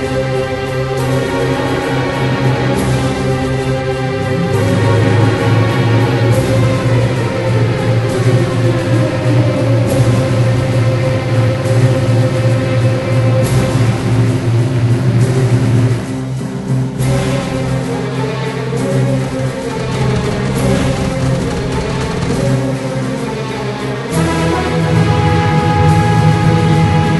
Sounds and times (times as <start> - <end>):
Music: 0.0 - 27.2.